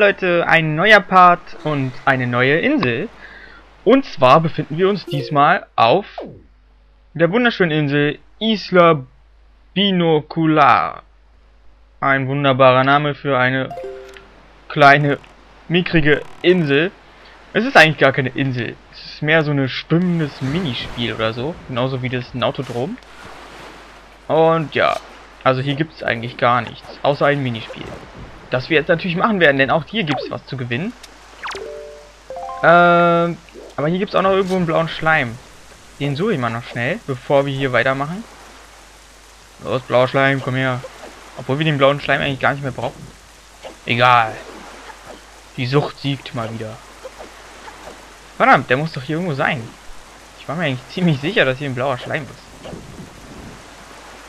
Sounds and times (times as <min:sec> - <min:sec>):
Speech: 0:00.0 - 0:03.2, 0:03.9 - 0:06.3, 0:07.2 - 0:09.1, 0:09.8 - 0:11.1, 0:12.0 - 0:13.9, 0:14.7 - 0:16.9, 0:17.5 - 0:23.0, 0:24.3 - 0:31.0, 0:32.6 - 0:35.4, 0:36.0 - 0:38.2, 0:39.6 - 0:43.1, 0:43.9 - 0:44.4, 0:45.6 - 0:46.8, 0:48.4 - 0:49.8, 0:50.4 - 0:52.5.